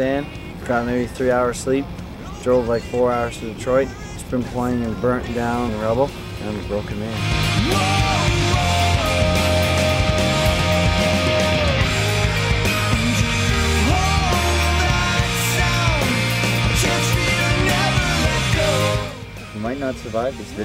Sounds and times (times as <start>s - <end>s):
Speech: 0.0s - 7.2s, 19.6s - 20.6s
Music: 7.1s - 20.6s.